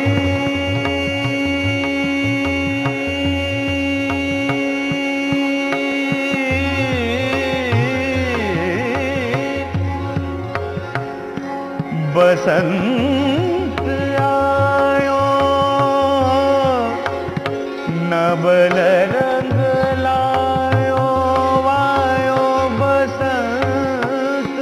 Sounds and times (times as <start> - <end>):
Carnatic music: 0.0 - 24.6.